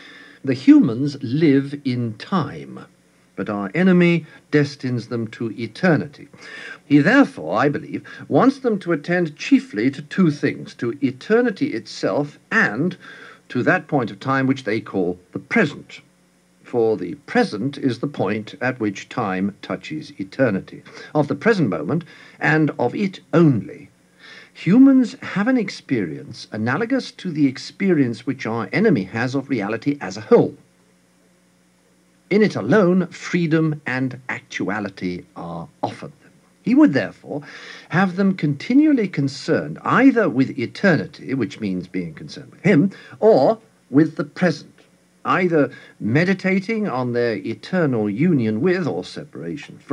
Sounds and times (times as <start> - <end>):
Narration, monologue: 0.0 - 49.9.